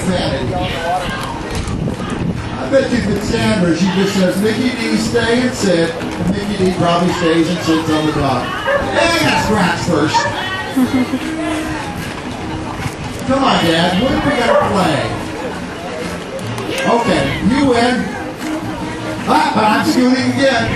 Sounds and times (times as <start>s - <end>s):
Bow-wow: 8.6s - 9.0s, 10.1s - 10.5s, 14.4s - 14.9s.